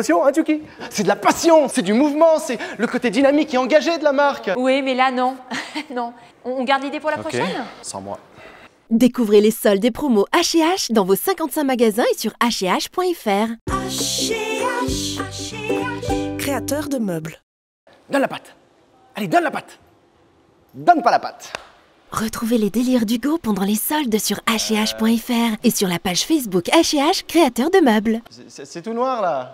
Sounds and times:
Music: 13.7 - 17.0
Speech: 22.2 - 29.5.

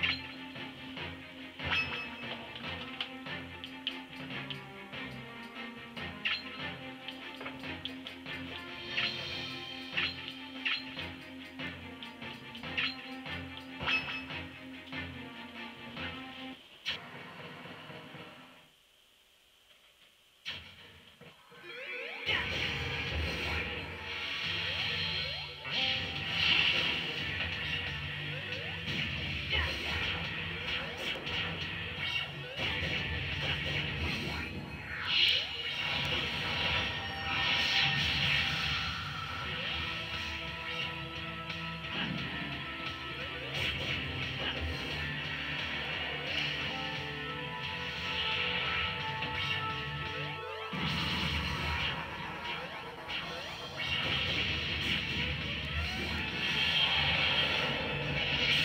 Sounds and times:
Music: 0.0 - 18.7, 20.5 - 58.6.

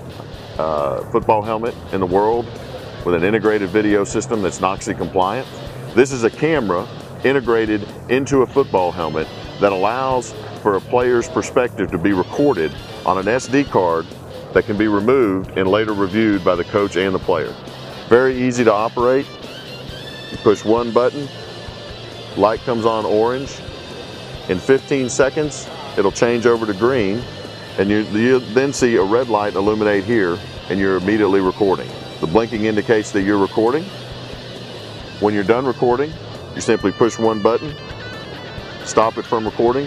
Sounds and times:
Music: 0.0 - 39.8
Speech: 0.6 - 19.3, 20.4 - 21.3, 22.4 - 23.6, 24.5 - 27.2, 27.8 - 33.9, 35.2 - 37.8, 38.8 - 39.8.

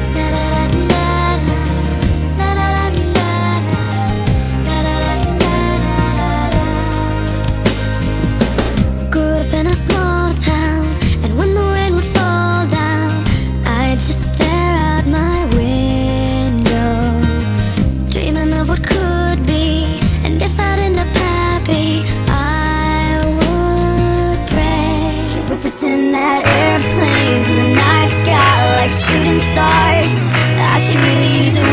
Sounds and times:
Music: 0.0 - 31.7.

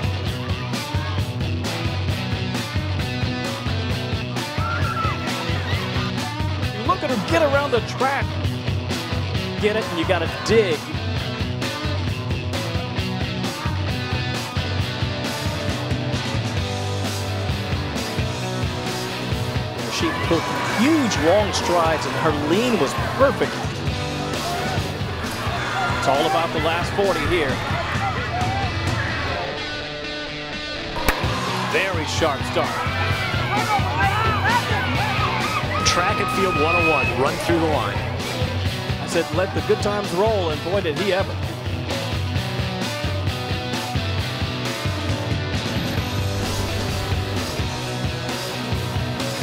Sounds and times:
Music: 0.0 - 49.4
Speech: 6.8 - 8.3, 9.6 - 11.0, 19.9 - 23.6, 26.0 - 27.6, 31.7 - 32.8, 35.8 - 38.0, 39.0 - 41.4.

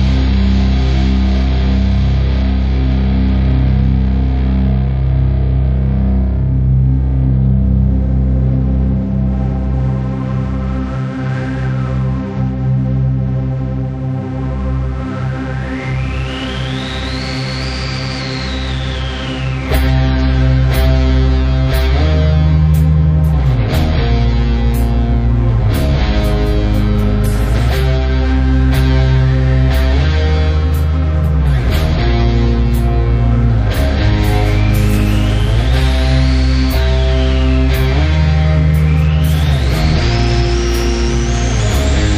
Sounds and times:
Music: 0.0 - 42.1.

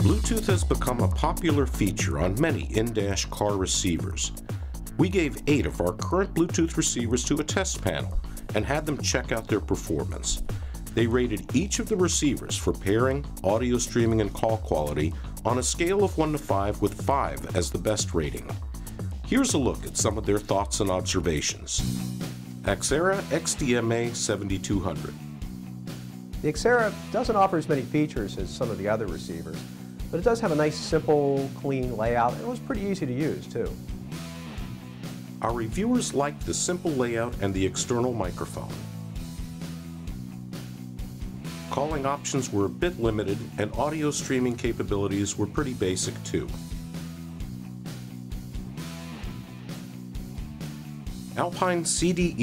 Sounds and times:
Speech: 0.0 - 4.4, 5.0 - 18.6, 19.3 - 21.9, 22.7 - 25.2, 26.4 - 33.8, 35.4 - 38.8, 41.7 - 46.6, 51.3 - 52.4
Music: 0.0 - 52.4.

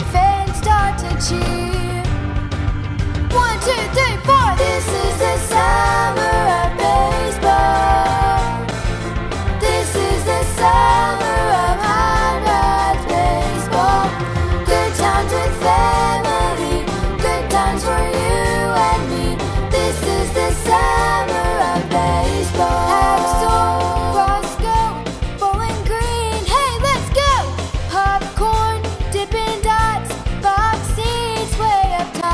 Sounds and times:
Music: 0.0 - 32.3.

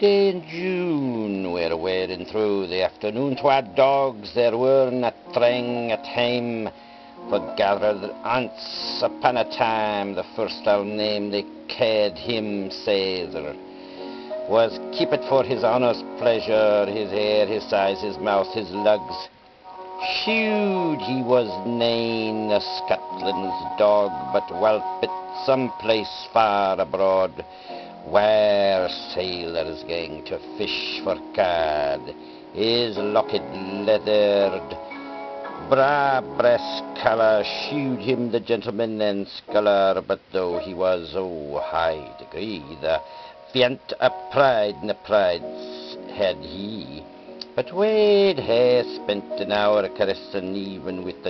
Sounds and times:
Speech: 0.0 - 6.7, 7.3 - 13.6, 14.5 - 19.3, 20.0 - 27.4, 28.1 - 34.8, 35.6 - 43.0, 43.6 - 51.3
Music: 0.0 - 51.3.

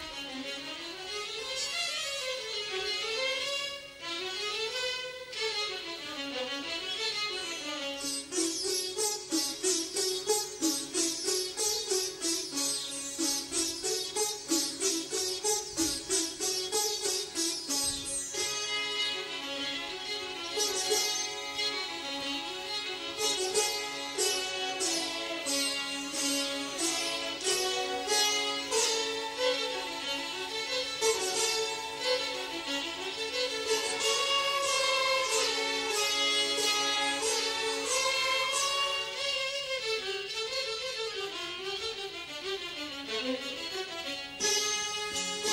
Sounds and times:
Music: 0.0 - 45.5.

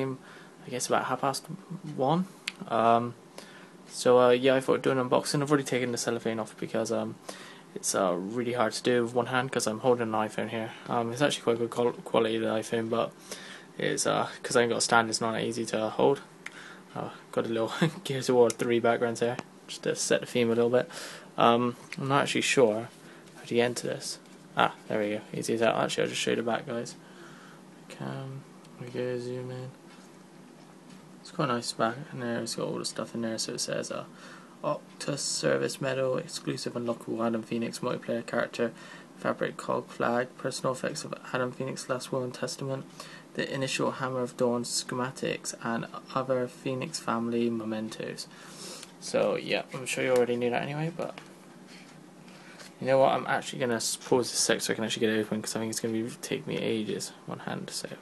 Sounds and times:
Speech: 0.0 - 3.2, 3.9 - 7.2, 7.8 - 13.2, 13.8 - 16.3, 16.9 - 27.0, 27.9 - 29.8, 31.2 - 48.3, 49.0 - 51.2, 52.8 - 58.0.

